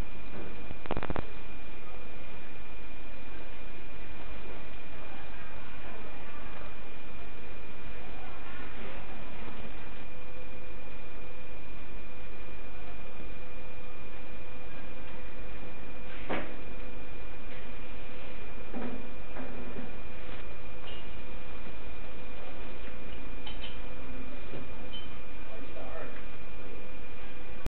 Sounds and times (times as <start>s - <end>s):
Speech: 25.4s - 26.3s.